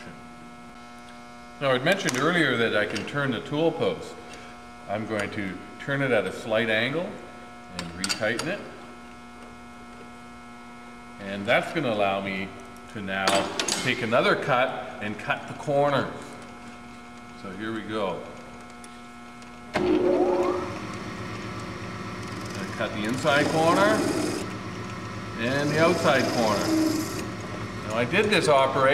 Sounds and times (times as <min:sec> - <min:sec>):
Speech: 0:01.6 - 0:04.2, 0:04.9 - 0:08.8, 0:11.2 - 0:16.4, 0:17.4 - 0:18.4, 0:22.6 - 0:24.2, 0:25.4 - 0:26.8, 0:27.8 - 0:28.9.